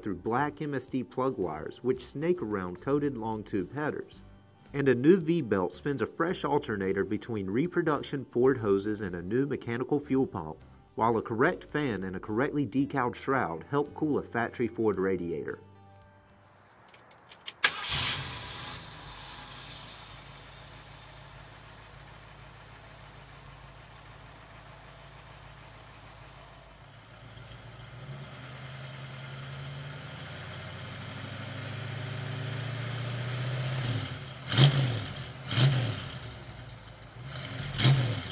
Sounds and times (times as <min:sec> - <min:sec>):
Car: 0:16.0 - 0:38.3.